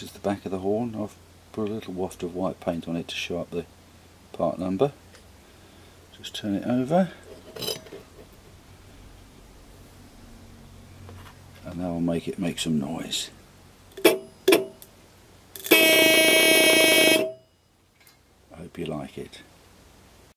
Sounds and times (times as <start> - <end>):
Speech: 0.0 - 3.7, 4.3 - 5.0, 6.1 - 7.2, 11.6 - 13.4, 18.5 - 19.5
Vehicle horn, car horn, honking: 14.0 - 14.8, 15.6 - 17.6.